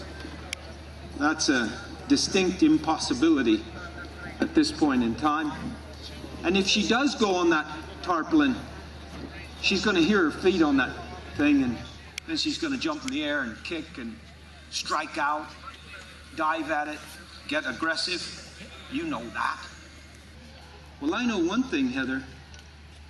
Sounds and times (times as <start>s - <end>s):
Speech: 9.3s - 19.8s.